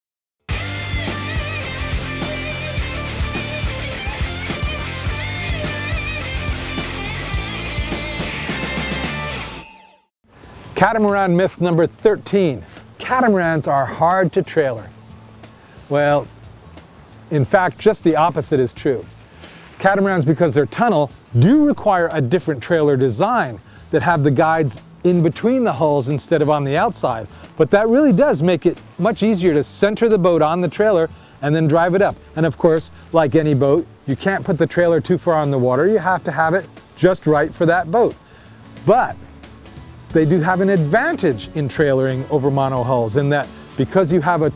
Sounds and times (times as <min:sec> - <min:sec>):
Music: 0:00.5 - 0:44.5
Speech: 0:10.8 - 0:14.9, 0:15.9 - 0:16.3, 0:17.3 - 0:19.1, 0:19.8 - 0:38.2, 0:38.8 - 0:39.2, 0:40.1 - 0:44.5.